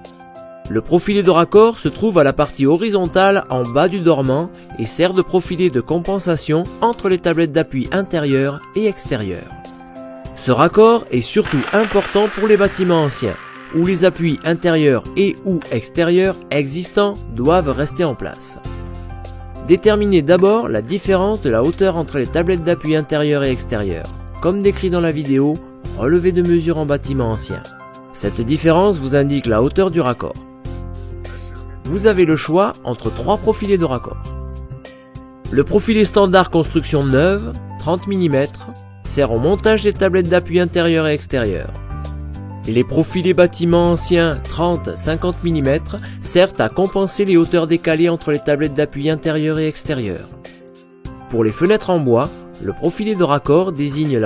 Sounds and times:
Music: 0.0 - 54.2
Speech: 0.7 - 9.5, 10.4 - 18.6, 19.7 - 30.4, 31.9 - 34.2, 35.5 - 41.8, 42.7 - 50.3, 51.3 - 54.2.

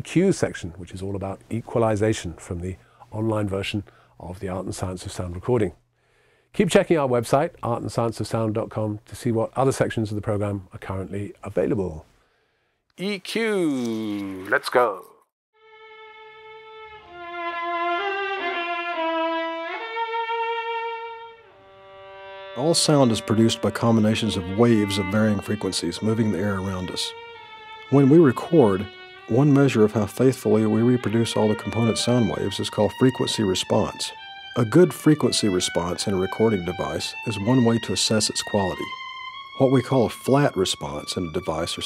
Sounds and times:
Speech: 0.0 - 5.8, 6.6 - 12.1, 13.0 - 15.2, 22.6 - 27.1, 27.9 - 38.9, 39.6 - 41.8
Music: 15.6 - 41.8.

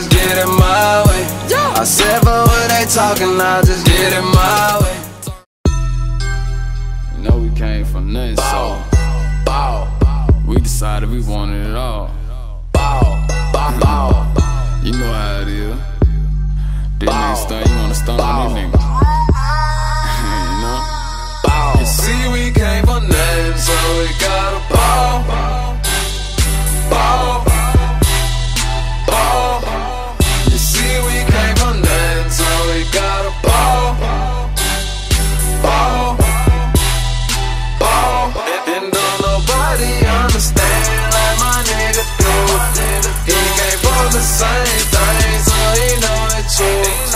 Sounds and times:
Rhythm and blues: 0.0 - 11.2, 12.8 - 47.1.

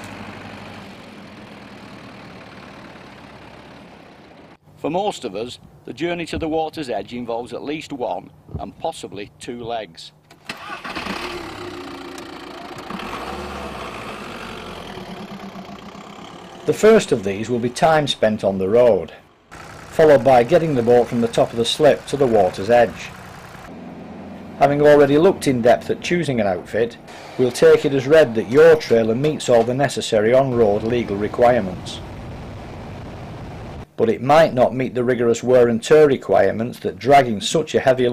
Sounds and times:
Vehicle: 0.0 - 4.8, 10.2 - 32.9
Speech: 4.8 - 10.2, 16.7 - 19.2, 20.0 - 23.1, 24.6 - 32.0, 34.0 - 38.1.

